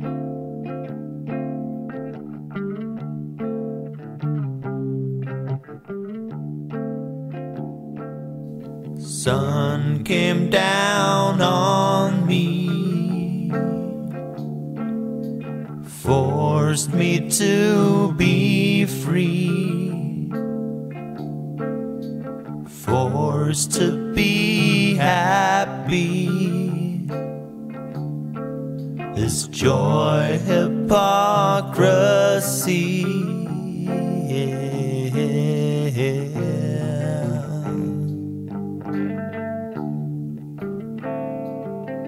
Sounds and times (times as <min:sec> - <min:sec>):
Music: 0:00.0 - 0:42.0.